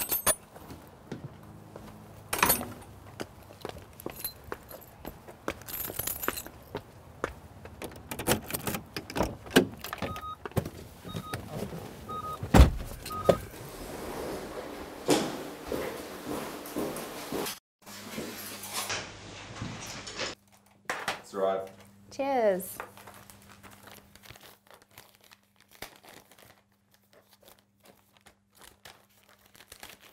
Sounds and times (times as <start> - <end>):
Sliding door: 12.6 - 16.0.